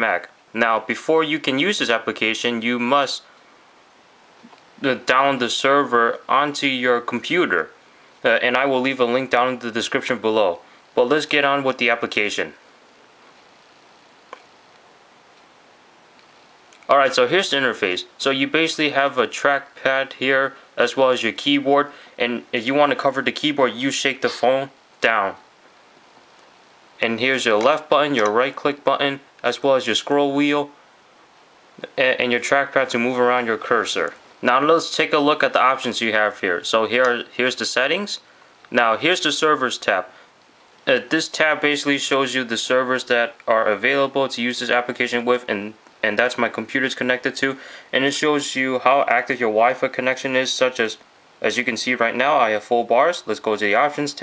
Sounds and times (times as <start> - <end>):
Speech: 0.0 - 3.3, 4.8 - 12.6, 16.9 - 25.5, 27.0 - 30.8, 31.8 - 40.2, 40.9 - 54.2.